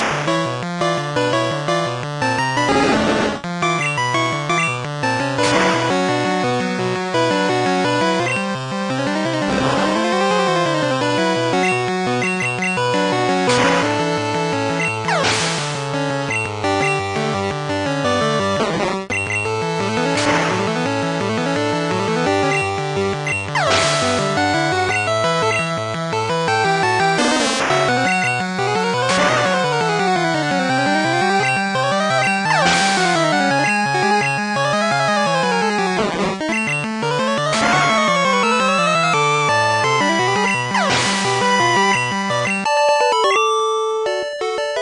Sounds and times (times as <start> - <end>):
Music: 0.0 - 44.8.